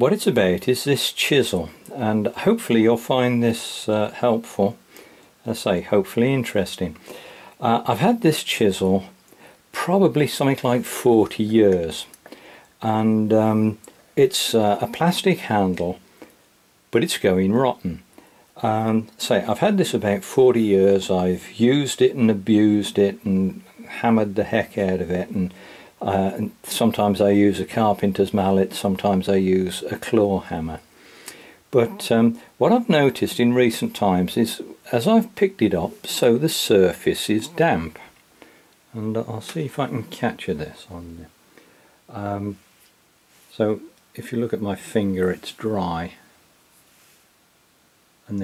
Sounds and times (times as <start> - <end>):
Speech: 0.0 - 4.8, 5.4 - 7.0, 7.6 - 12.2, 12.8 - 16.0, 16.9 - 30.8, 31.7 - 38.2, 38.9 - 41.4, 42.1 - 42.6, 43.5 - 46.3.